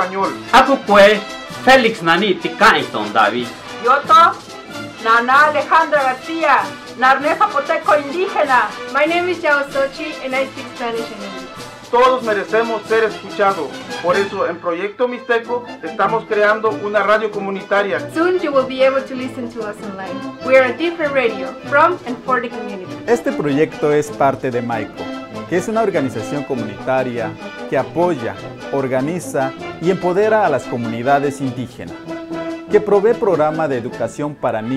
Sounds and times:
Speech: 0:00.0 - 0:04.4, 0:12.0 - 0:19.8, 0:20.5 - 0:31.9, 0:32.8 - 0:34.7
Music: 0:00.0 - 0:34.7.

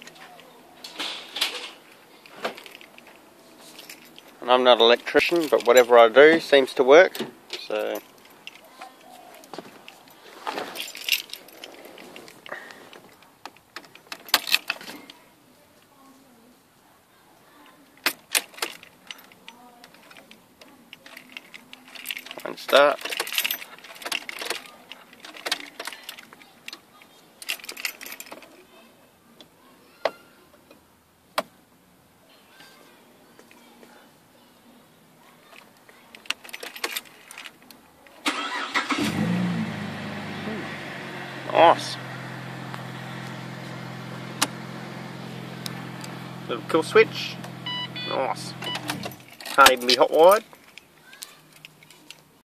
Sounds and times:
Car: 0:38.3 - 0:49.4.

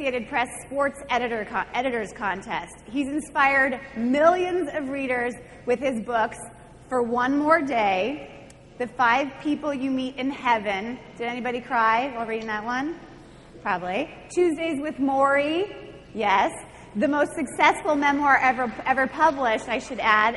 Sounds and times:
Female speech, woman speaking: 0:00.0 - 0:08.2, 0:08.8 - 0:13.0, 0:13.6 - 0:20.3
Narration, monologue: 0:00.0 - 0:20.3.

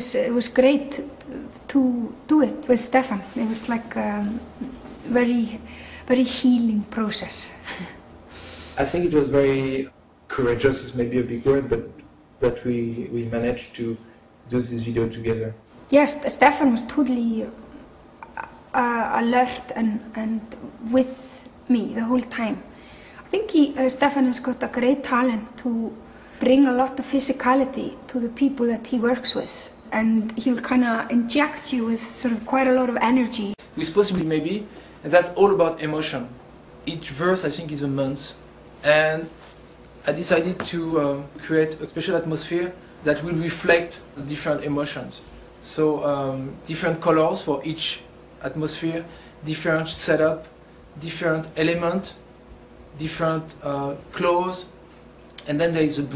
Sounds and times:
Female speech, woman speaking: 0:00.0 - 0:07.9, 0:15.9 - 0:22.7, 0:23.3 - 0:35.2.

